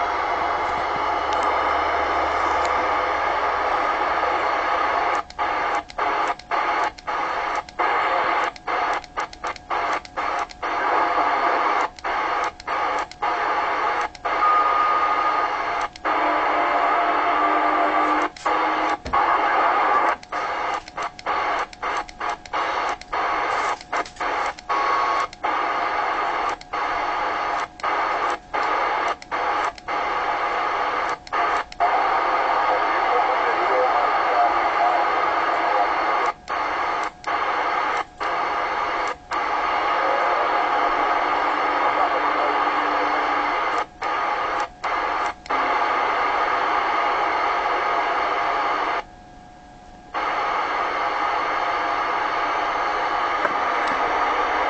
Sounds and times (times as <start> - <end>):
Radio: 0.0 - 49.1, 50.1 - 54.6.